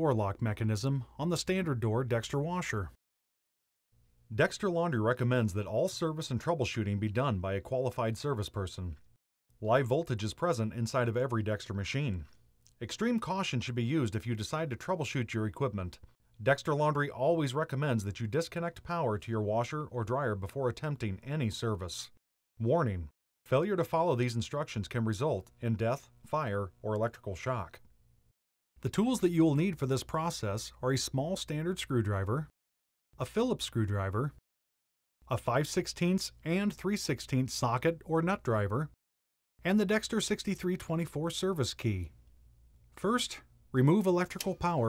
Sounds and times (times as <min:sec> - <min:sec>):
Speech: 0:00.0 - 0:03.0, 0:04.3 - 0:09.0, 0:09.6 - 0:27.8, 0:28.8 - 0:32.5, 0:33.2 - 0:34.4, 0:35.2 - 0:39.0, 0:39.6 - 0:42.2, 0:43.0 - 0:44.8.